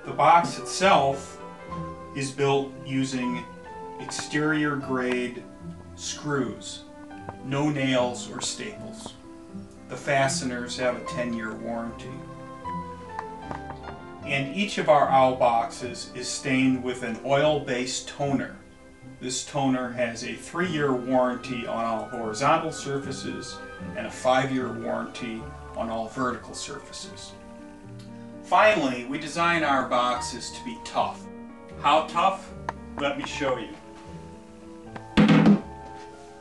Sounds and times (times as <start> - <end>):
Speech: 0.0 - 1.4, 2.2 - 5.4, 6.0 - 9.2, 9.9 - 12.2, 14.2 - 18.6, 19.2 - 27.4, 28.5 - 33.8
Music: 0.0 - 36.4.